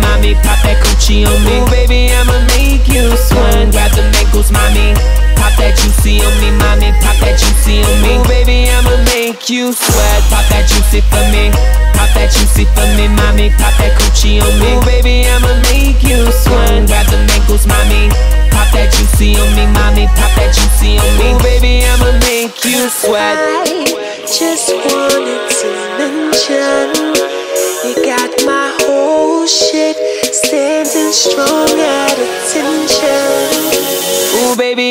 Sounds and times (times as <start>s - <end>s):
Music of Africa: 0.0s - 34.8s.